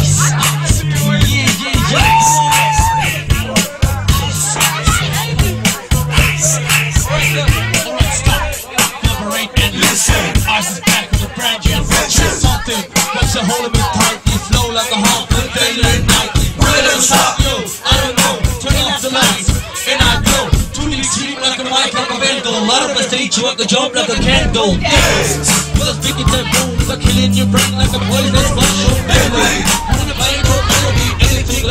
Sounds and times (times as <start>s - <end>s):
Music: 0.0s - 31.7s.